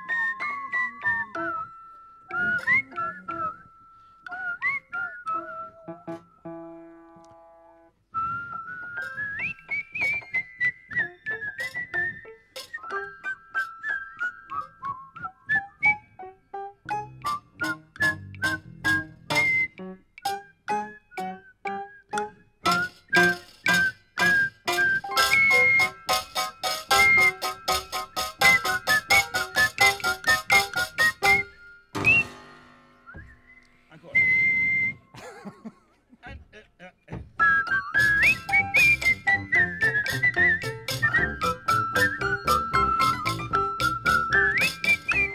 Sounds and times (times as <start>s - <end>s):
Bowed string instrument: 0.0s - 3.7s, 16.6s - 34.2s, 37.4s - 45.3s
Speech: 33.9s - 34.3s, 36.2s - 37.2s.